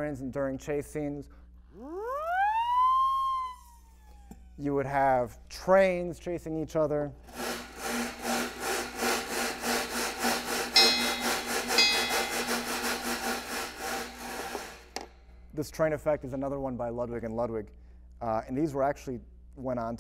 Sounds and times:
Speech: 0.0 - 1.3, 4.6 - 7.2, 15.6 - 20.0
Percussion: 8.0 - 15.1.

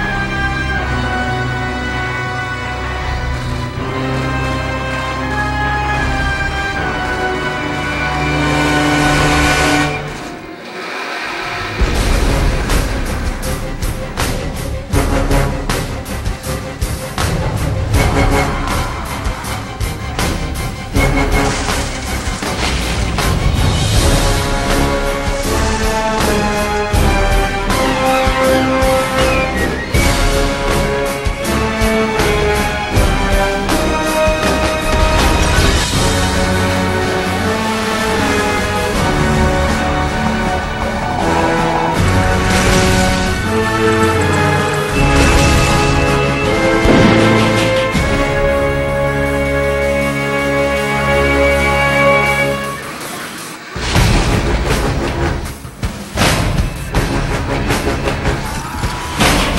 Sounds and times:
Music: 0.0 - 59.5.

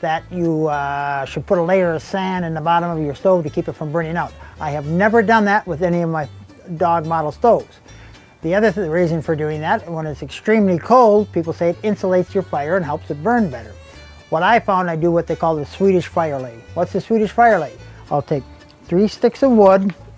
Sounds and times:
Speech: 0.0 - 7.7, 8.4 - 20.0
Music: 0.0 - 20.1.

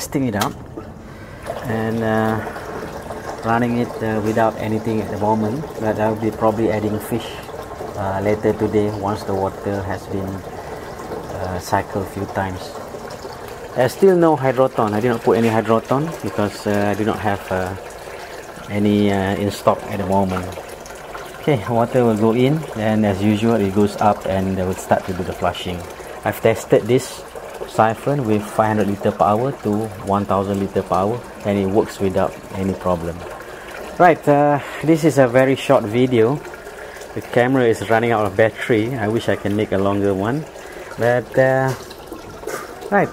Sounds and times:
Speech: 0.0 - 0.6, 1.6 - 2.5, 3.4 - 10.4, 11.3 - 12.8, 13.8 - 17.8, 18.6 - 20.6, 21.4 - 33.3, 34.0 - 36.5, 37.2 - 41.8, 42.9 - 43.1
Water: 0.0 - 43.1.

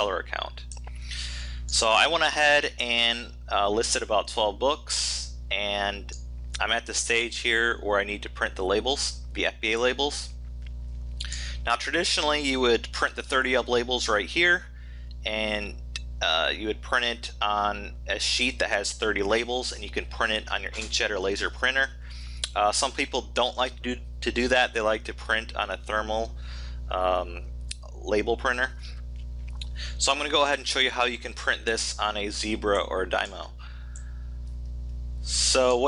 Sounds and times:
Speech: 0.0 - 0.8, 1.7 - 10.4, 11.2 - 29.0, 29.6 - 33.6, 35.3 - 35.8.

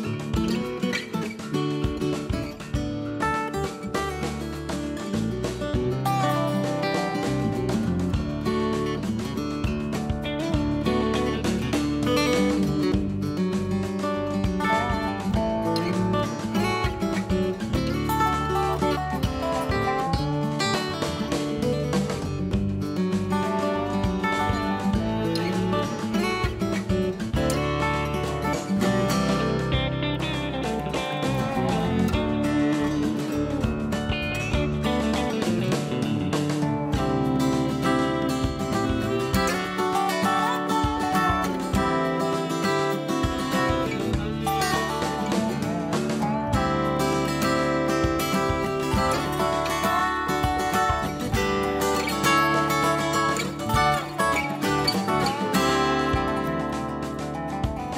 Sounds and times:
Music: 0.0 - 57.9.

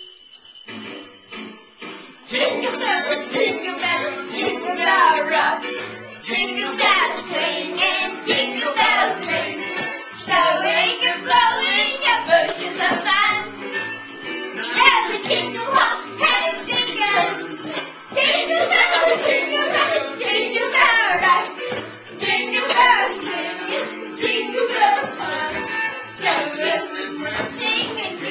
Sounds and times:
Jingle, tinkle: 0.0 - 13.0, 13.7 - 19.8
Music: 0.0 - 28.3.

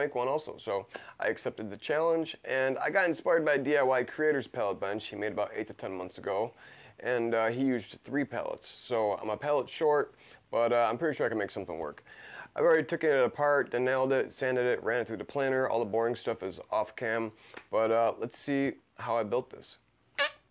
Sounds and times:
Speech: 0.0 - 12.0, 12.6 - 19.8.

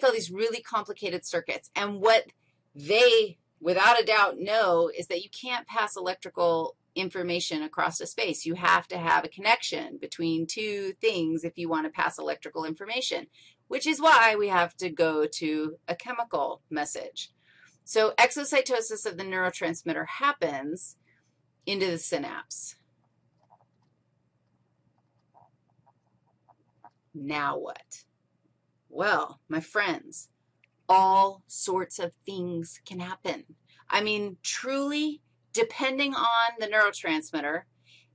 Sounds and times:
Speech: 0.0 - 17.3, 17.9 - 21.0, 21.7 - 22.8, 27.2 - 28.0, 29.0 - 30.3, 30.9 - 37.6.

